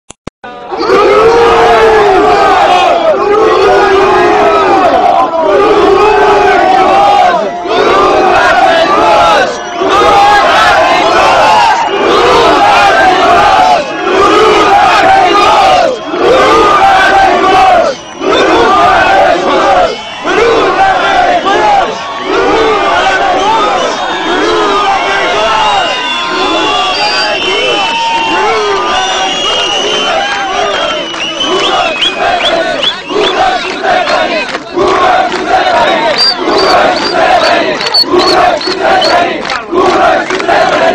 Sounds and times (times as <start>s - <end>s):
Crowd: 0.4s - 40.9s
Battle cry: 0.5s - 40.9s.